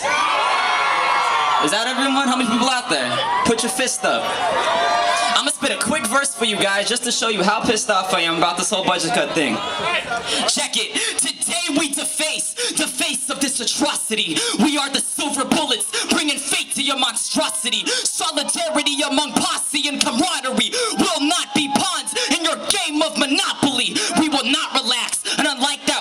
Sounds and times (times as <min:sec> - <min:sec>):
Speech: 0:01.6 - 0:04.3, 0:05.2 - 0:26.0.